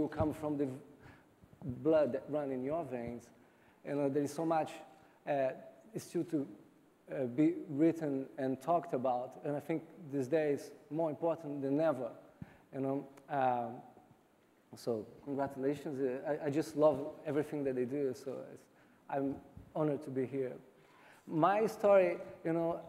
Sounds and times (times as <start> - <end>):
Speech: 0.0 - 0.8, 1.6 - 3.3, 3.9 - 13.9, 14.8 - 20.7, 21.3 - 22.8.